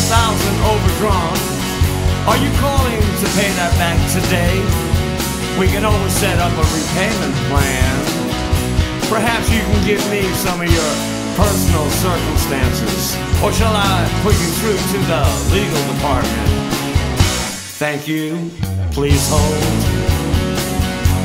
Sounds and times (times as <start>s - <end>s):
Speech: 0.0s - 1.5s, 2.3s - 4.8s, 5.6s - 8.1s, 9.0s - 16.6s, 17.8s - 20.1s
Music: 0.0s - 21.2s.